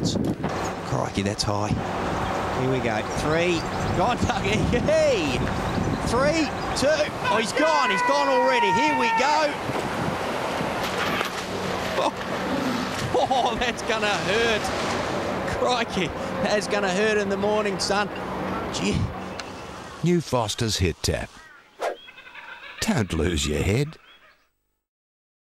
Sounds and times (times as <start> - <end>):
Speech: 20.0 - 21.4, 22.8 - 24.0.